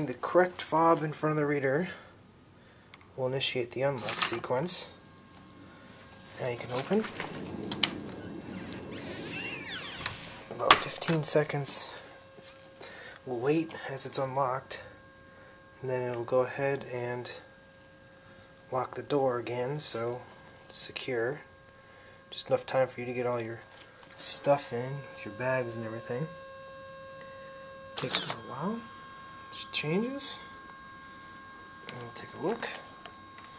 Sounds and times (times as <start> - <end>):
Speech: 0.0 - 2.1, 3.2 - 5.0, 6.4 - 7.2, 10.5 - 12.1, 13.3 - 15.0, 15.8 - 17.5, 18.7 - 21.5, 22.4 - 26.4, 28.0 - 28.9, 29.5 - 30.5, 31.9 - 32.9.